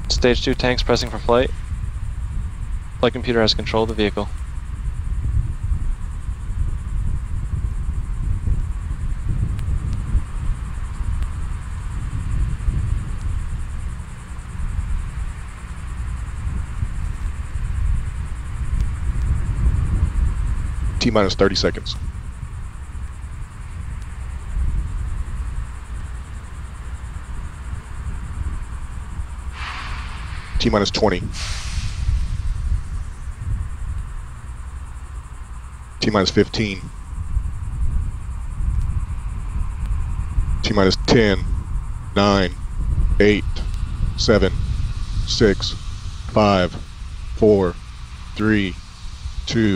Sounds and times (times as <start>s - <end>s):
Speech: 0.0s - 1.6s, 3.0s - 4.4s, 21.0s - 22.0s, 30.6s - 31.4s, 36.0s - 36.9s, 40.6s - 41.5s, 42.2s - 42.6s, 43.2s - 44.6s, 45.3s - 46.8s, 47.4s - 47.8s, 48.4s - 48.8s, 49.5s - 49.7s.